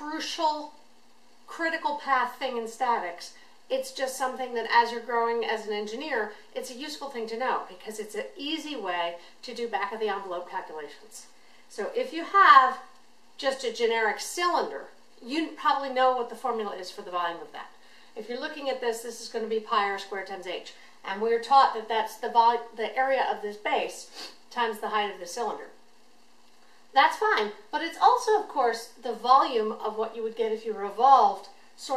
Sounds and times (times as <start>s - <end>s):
Speech: 0.0s - 0.8s, 1.5s - 25.8s, 26.9s - 31.9s.